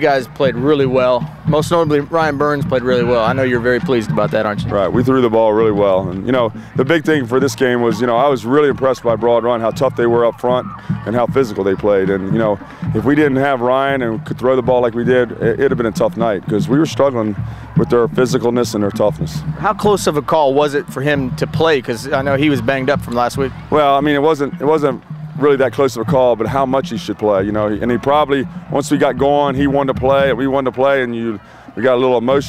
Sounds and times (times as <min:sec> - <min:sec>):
Music: 0:00.0 - 0:32.4
Speech: 0:00.0 - 0:32.4.